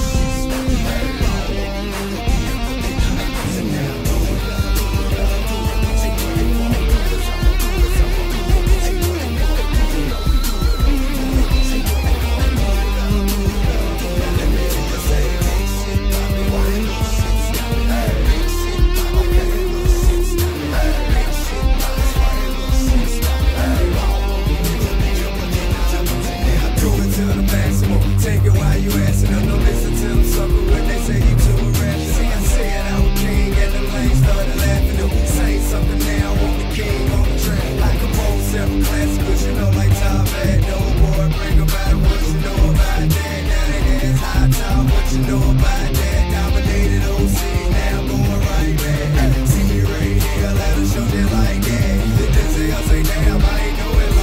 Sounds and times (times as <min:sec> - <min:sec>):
Bass guitar: 0:00.0 - 0:54.2.